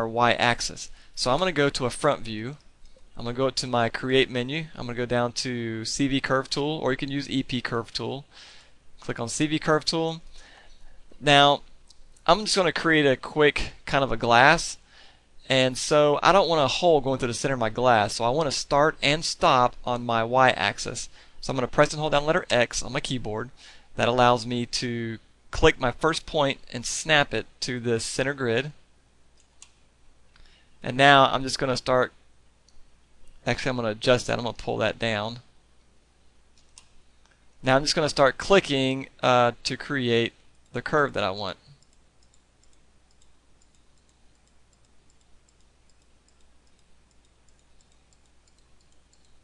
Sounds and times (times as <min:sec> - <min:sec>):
Speech: 0:00.0 - 0:02.6, 0:03.2 - 0:08.3, 0:09.0 - 0:10.2, 0:11.2 - 0:11.7, 0:12.3 - 0:14.8, 0:15.4 - 0:28.8, 0:30.8 - 0:32.2, 0:33.4 - 0:35.5, 0:37.6 - 0:41.7.